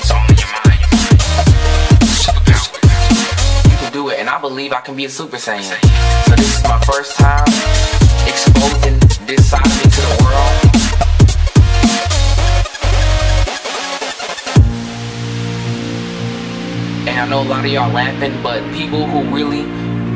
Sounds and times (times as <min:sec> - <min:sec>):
Dubstep: 0:00.0 - 0:04.1, 0:05.8 - 0:18.8
Speech: 0:03.8 - 0:07.5, 0:08.3 - 0:10.6, 0:17.1 - 0:19.8.